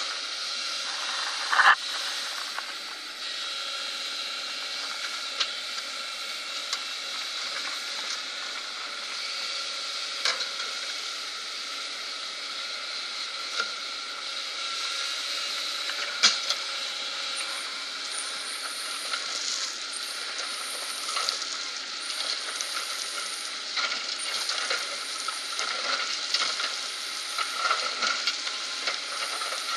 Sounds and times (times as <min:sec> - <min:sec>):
Vehicle: 0:00.0 - 0:29.7.